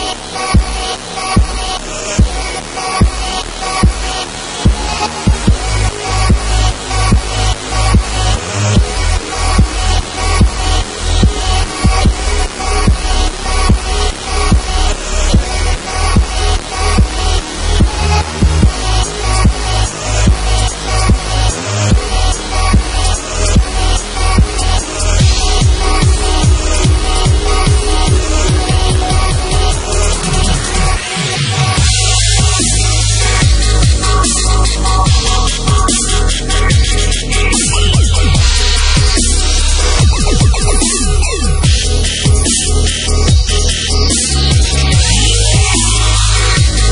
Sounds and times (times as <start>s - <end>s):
Dubstep: 0.0s - 46.9s.